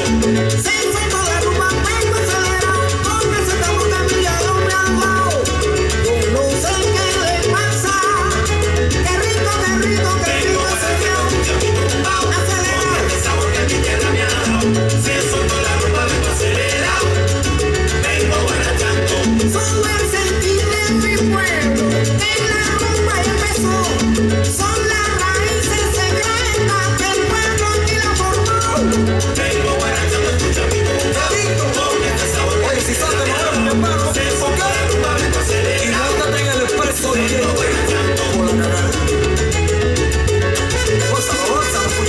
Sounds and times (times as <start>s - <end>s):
Music of Latin America: 0.0s - 42.0s.